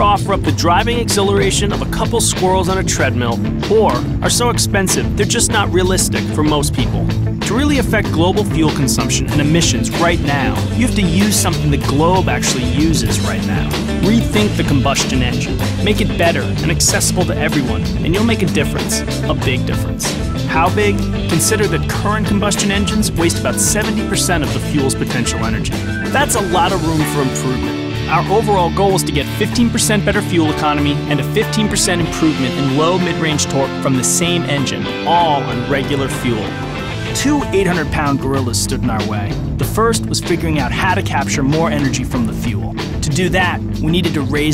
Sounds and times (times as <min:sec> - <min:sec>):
Music: 0:00.0 - 0:44.5
Speech: 0:00.0 - 0:44.5.